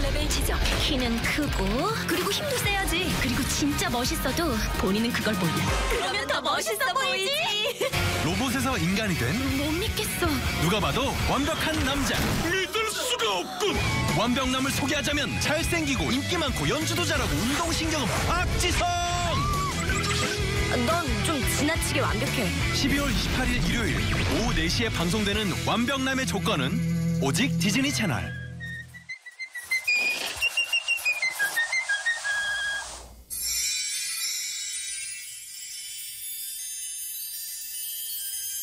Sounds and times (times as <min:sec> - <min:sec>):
Whistling: 0:19.2 - 0:20.5, 0:26.9 - 0:33.1.